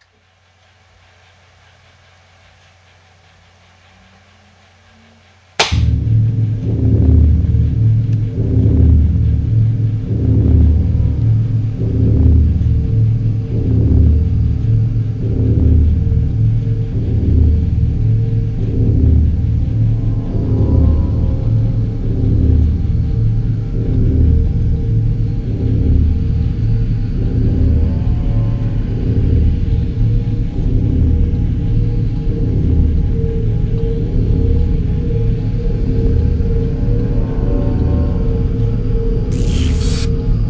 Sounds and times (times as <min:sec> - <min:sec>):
Inside, small room: 0:00.0 - 0:40.5
Music: 0:03.5 - 0:40.5.